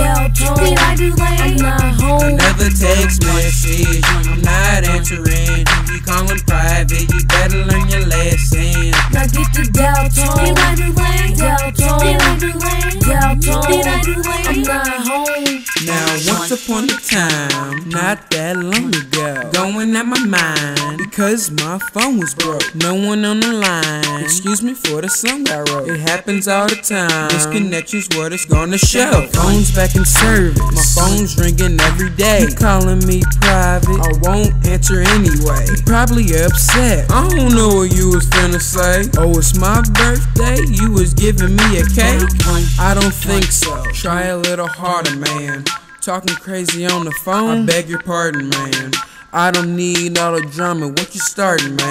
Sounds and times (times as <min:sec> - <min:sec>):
Music: 0:00.0 - 0:51.9.